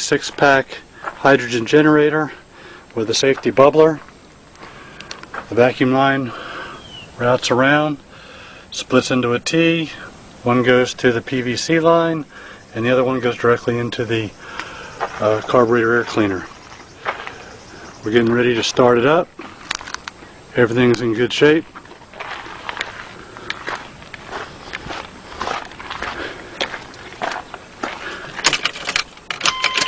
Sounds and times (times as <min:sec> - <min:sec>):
Speech: 0:00.0 - 0:02.4, 0:03.0 - 0:04.1, 0:05.5 - 0:06.4, 0:07.2 - 0:08.0, 0:08.8 - 0:14.4, 0:15.2 - 0:16.5, 0:18.0 - 0:19.3, 0:20.6 - 0:21.7.